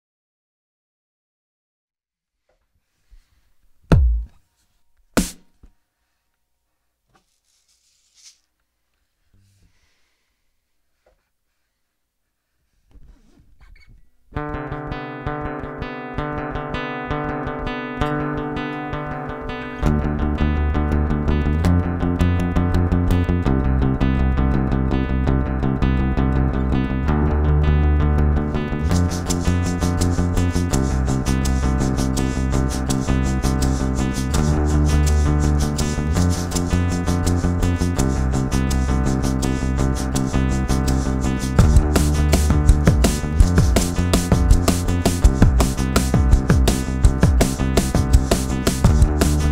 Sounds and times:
Inside, small room: 0:02.1 - 0:49.5.

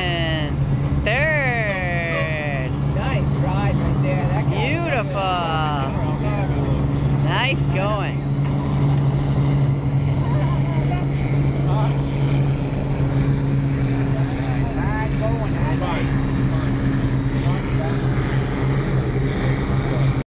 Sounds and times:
Motorboat, speedboat: 0:00.0 - 0:20.2.

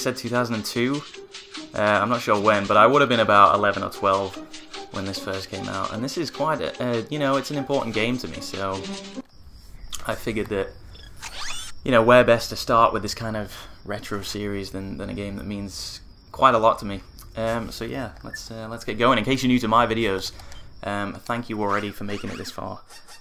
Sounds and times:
Speech: 0:00.0 - 0:01.0, 0:01.8 - 0:09.0, 0:10.0 - 0:10.7, 0:11.9 - 0:22.8.

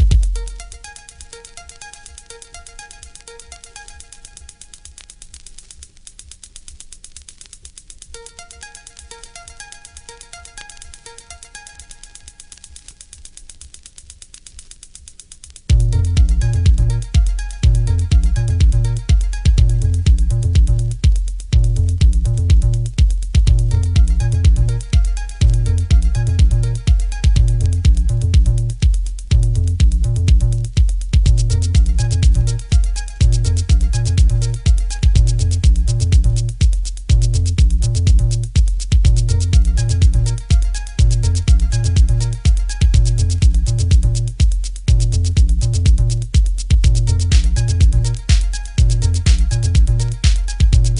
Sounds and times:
Music: 0:00.0 - 0:50.9.

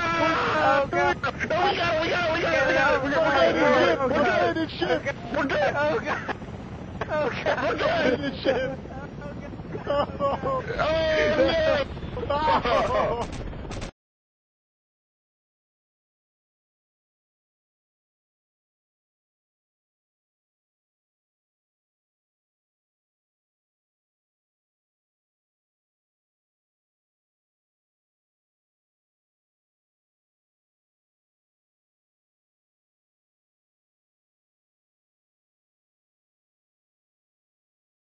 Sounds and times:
Speech: 0:00.0 - 0:06.4, 0:07.0 - 0:13.3.

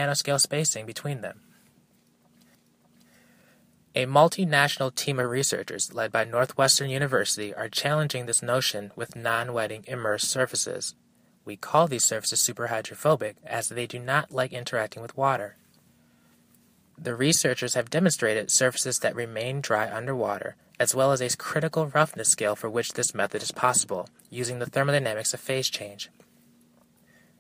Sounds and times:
Speech: 0:00.0 - 0:01.4, 0:04.0 - 0:15.6, 0:17.0 - 0:26.2.

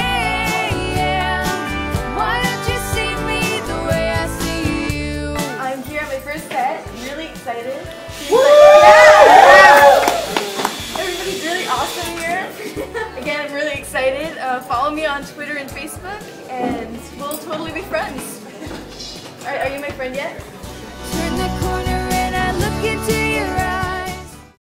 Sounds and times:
Music: 0:00.0 - 0:24.6
Speech: 0:05.6 - 0:07.9, 0:13.2 - 0:20.4.

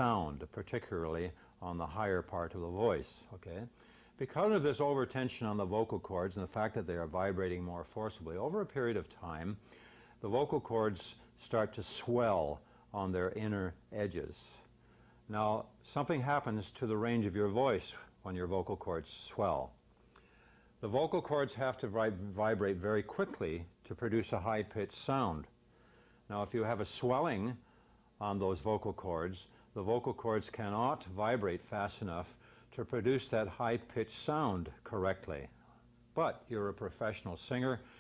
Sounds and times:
Speech: 0:00.0 - 0:09.6, 0:10.2 - 0:14.7, 0:15.3 - 0:19.8, 0:20.8 - 0:25.6, 0:26.3 - 0:27.6, 0:28.2 - 0:35.6, 0:36.2 - 0:37.9.

